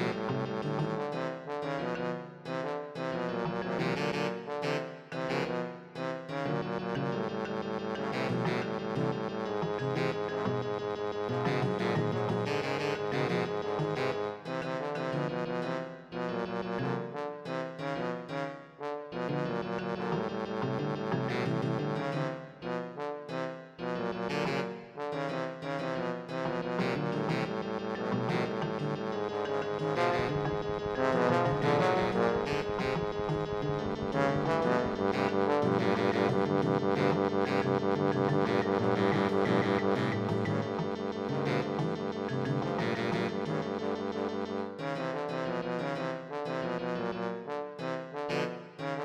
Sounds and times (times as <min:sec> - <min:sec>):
Funny music: 0:00.0 - 0:49.0.